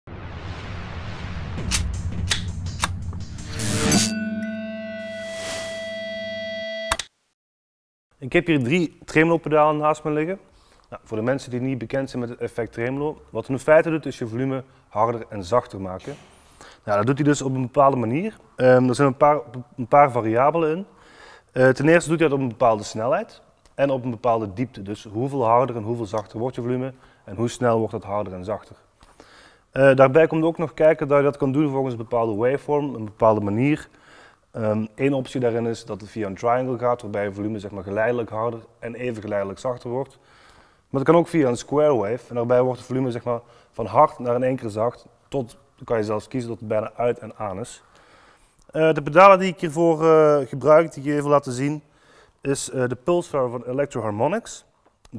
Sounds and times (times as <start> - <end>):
Musical instrument: 2.6 - 7.0
Speech: 8.2 - 16.2, 16.9 - 20.9, 21.6 - 28.8, 29.8 - 33.9, 34.6 - 40.2, 40.9 - 47.8, 48.7 - 55.1.